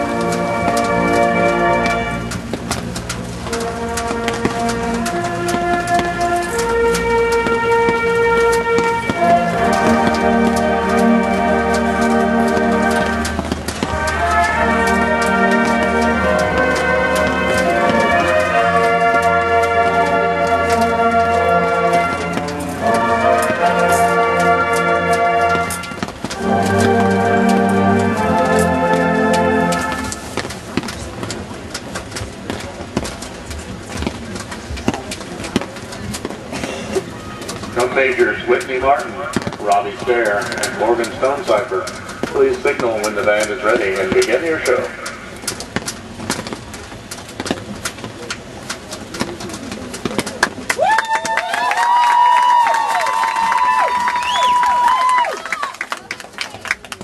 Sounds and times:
Music: 0.0s - 30.5s.

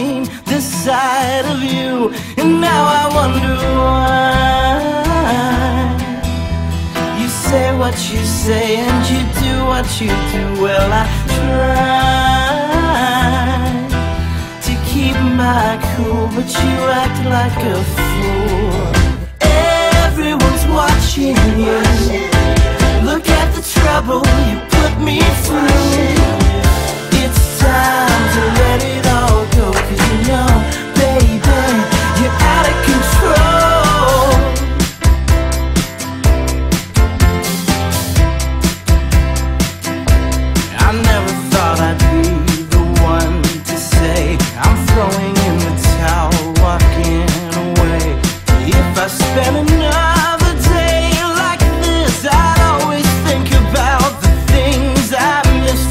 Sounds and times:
Happy music: 0.0s - 55.9s
Independent music: 0.0s - 55.9s.

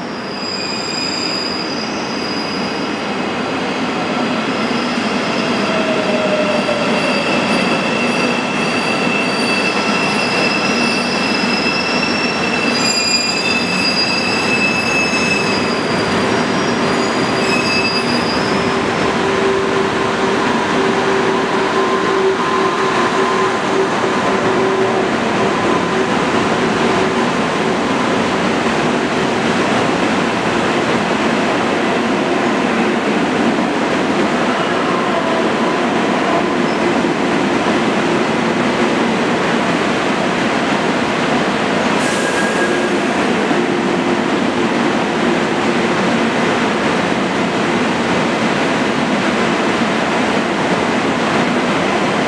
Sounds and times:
Railroad car, train wagon: 0.0s - 52.2s
Subway, metro, underground: 0.0s - 52.2s
Train: 0.0s - 52.2s.

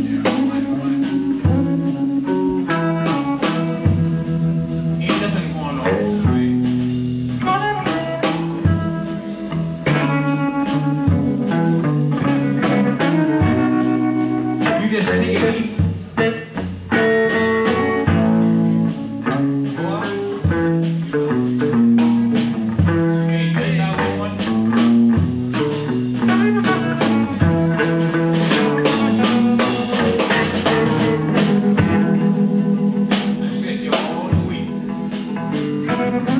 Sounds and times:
Music: 0.0s - 36.3s.

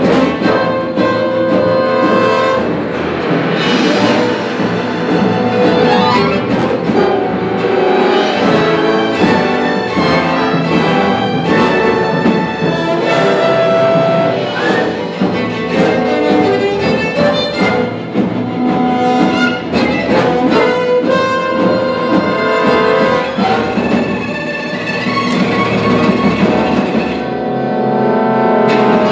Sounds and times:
Cello: 0.0s - 29.1s
Violin, fiddle: 4.2s - 27.8s.

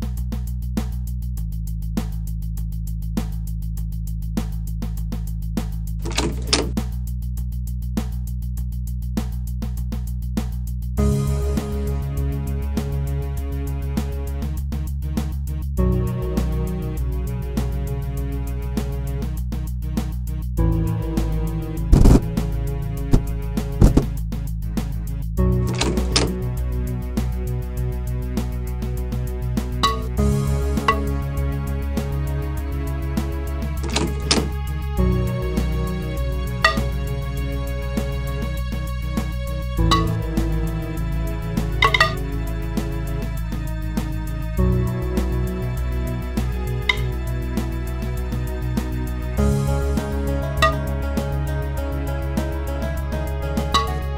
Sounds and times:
Music: 0.0s - 54.1s.

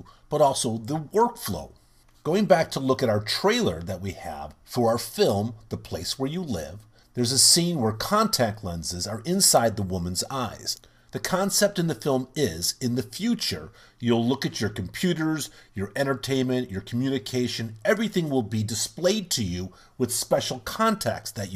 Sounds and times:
Speech: 0.0s - 21.5s.

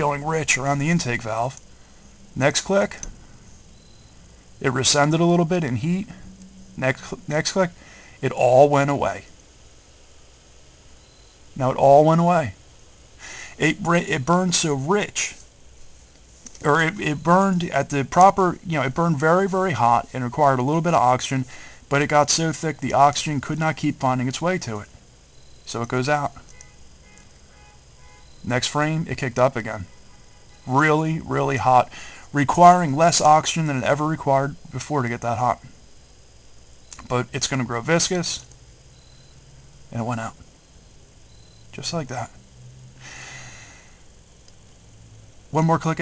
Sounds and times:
Speech: 0.0s - 1.6s, 2.4s - 3.1s, 4.6s - 6.2s, 6.8s - 9.3s, 11.6s - 12.6s, 13.6s - 15.4s, 16.6s - 25.0s, 25.7s - 26.4s, 28.5s - 29.9s, 30.7s - 35.7s, 37.0s - 38.5s, 39.9s - 40.4s, 41.8s - 42.4s, 45.5s - 46.0s.

